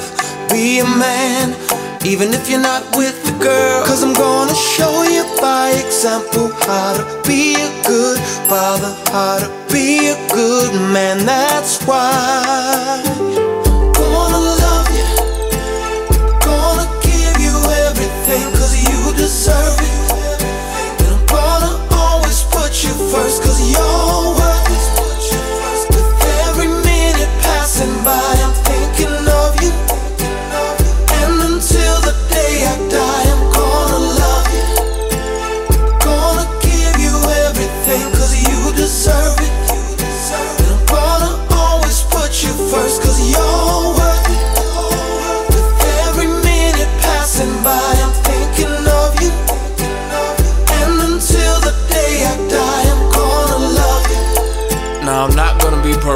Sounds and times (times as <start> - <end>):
Music: 0.0 - 56.1.